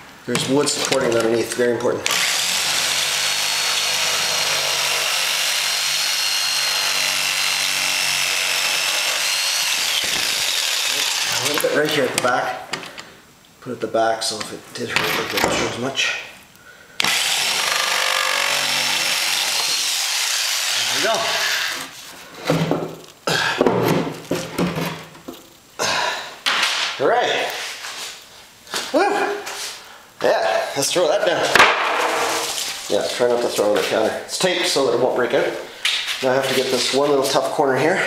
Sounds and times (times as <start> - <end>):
Speech: 0.3 - 2.1, 11.0 - 12.7, 13.6 - 16.4, 20.9 - 21.4, 27.0 - 27.6, 30.2 - 31.6, 32.9 - 38.0
Wood: 2.1 - 13.0, 17.0 - 25.5, 31.4 - 32.8.